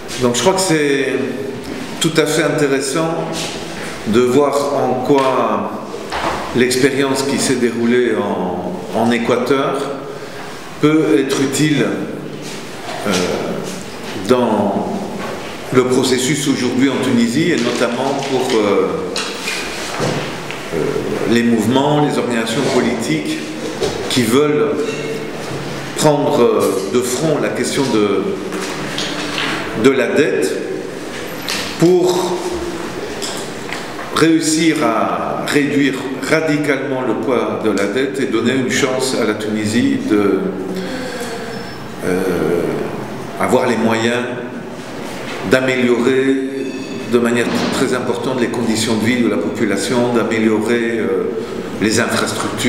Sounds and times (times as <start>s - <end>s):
Speech: 0.1s - 10.1s, 10.8s - 19.4s, 20.7s - 28.8s, 29.6s - 30.9s, 31.6s - 33.5s, 34.1s - 44.6s, 45.4s - 52.6s.